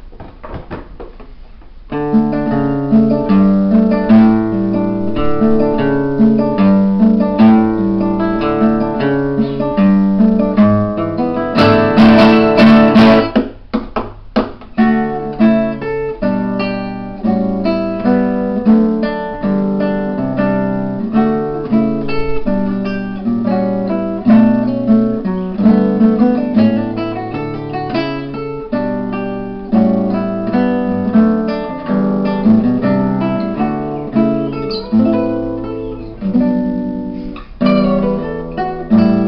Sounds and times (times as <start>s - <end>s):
Acoustic guitar: 0.0s - 39.2s
Strum: 0.0s - 39.2s.